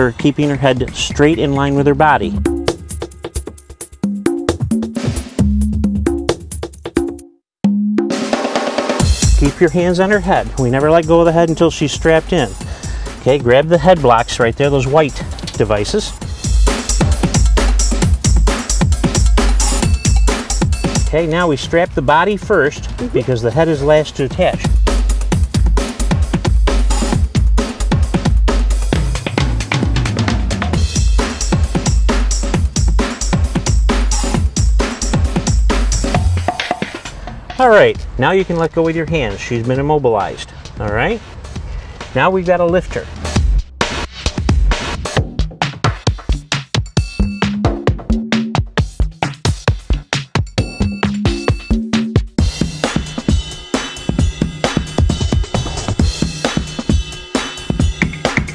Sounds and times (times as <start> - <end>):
Speech: 0.0 - 2.4, 9.4 - 12.6, 13.2 - 16.2, 21.1 - 24.7, 37.6 - 41.3, 42.2 - 43.1
Drum and bass: 0.0 - 6.8, 8.1 - 58.5.